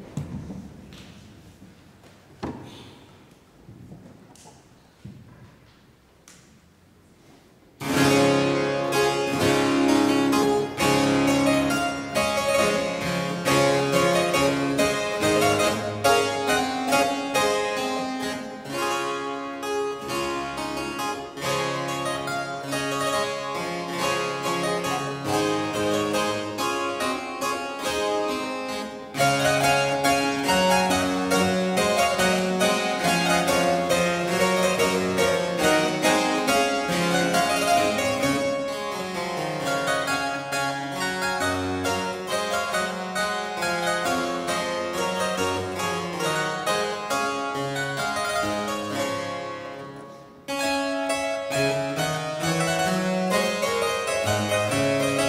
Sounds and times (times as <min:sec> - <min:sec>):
Music: 0:07.8 - 0:55.2.